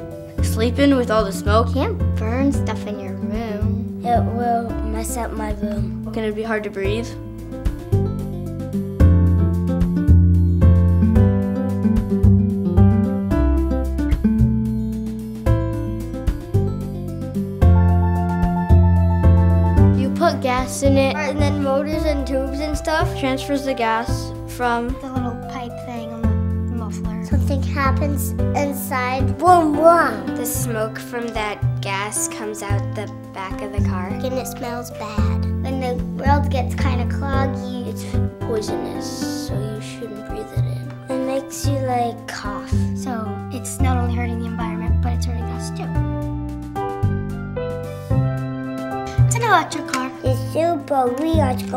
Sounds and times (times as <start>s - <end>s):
Music: 0.0s - 51.7s
Speech: 0.4s - 7.2s, 20.0s - 46.0s, 49.3s - 51.7s.